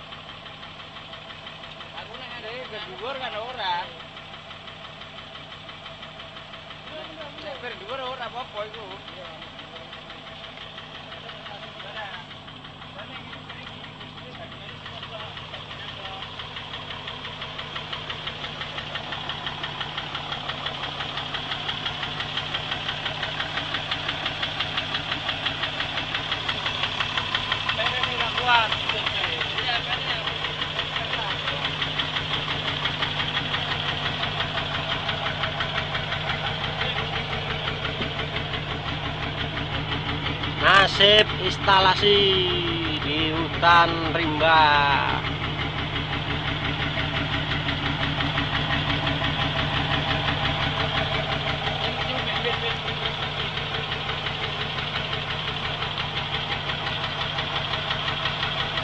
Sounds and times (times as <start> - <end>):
Vehicle: 0.0 - 58.8
Speech: 2.0 - 4.0, 6.9 - 9.4, 27.8 - 31.7, 40.6 - 45.3.